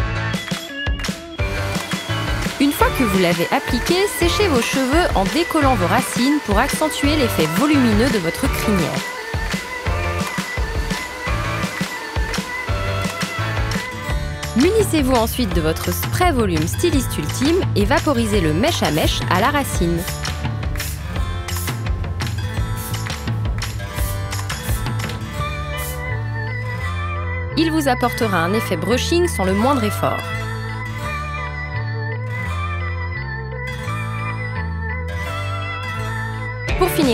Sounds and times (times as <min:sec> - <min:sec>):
Music: 0:00.0 - 0:37.1
Speech: 0:02.6 - 0:09.1, 0:14.6 - 0:20.1, 0:27.6 - 0:30.3, 0:36.8 - 0:37.1.